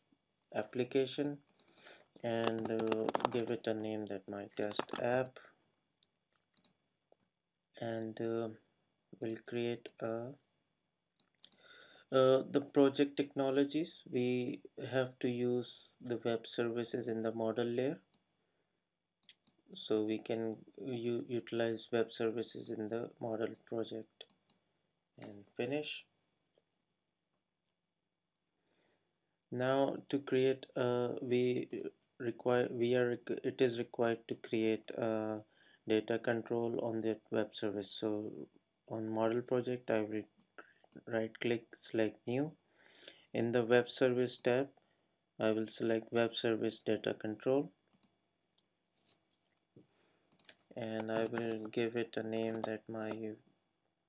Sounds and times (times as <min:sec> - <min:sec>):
Speech: 0:00.6 - 0:01.4, 0:02.2 - 0:05.4, 0:07.8 - 0:08.6, 0:09.2 - 0:10.4, 0:12.1 - 0:18.0, 0:19.8 - 0:24.2, 0:25.2 - 0:26.0, 0:29.5 - 0:40.3, 0:41.0 - 0:42.5, 0:43.4 - 0:44.7, 0:45.4 - 0:47.7, 0:50.7 - 0:53.4
Clicking: 0:11.2 - 0:11.6, 0:47.9 - 0:48.7, 0:50.3 - 0:51.7.